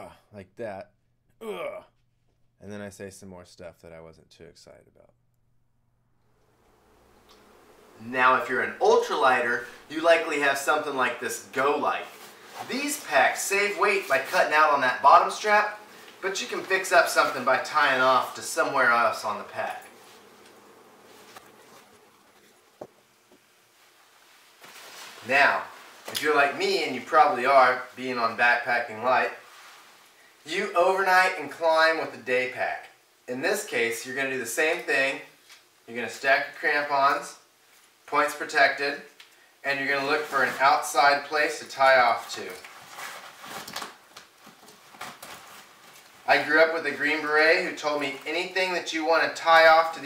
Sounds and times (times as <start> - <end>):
Speech: 0.0 - 1.9, 2.6 - 5.1, 8.0 - 19.9, 25.2 - 29.4, 30.4 - 35.3, 35.9 - 37.4, 38.1 - 42.7, 46.3 - 50.0
Inside, small room: 0.0 - 50.0.